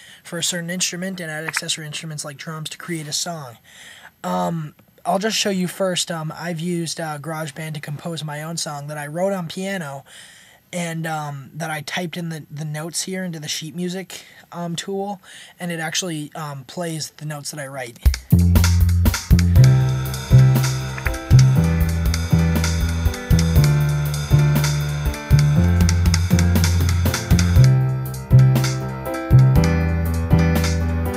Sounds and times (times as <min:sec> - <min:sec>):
Speech: 0:00.3 - 0:03.6, 0:04.2 - 0:10.0, 0:10.7 - 0:18.1
Music: 0:18.1 - 0:31.1.